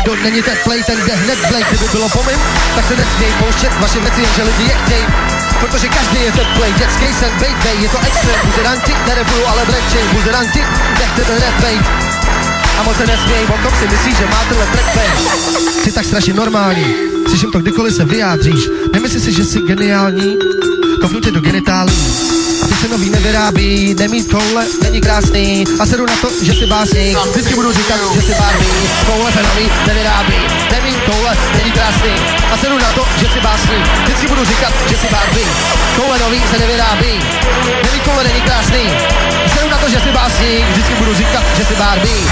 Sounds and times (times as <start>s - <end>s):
Music: 0.0s - 42.3s.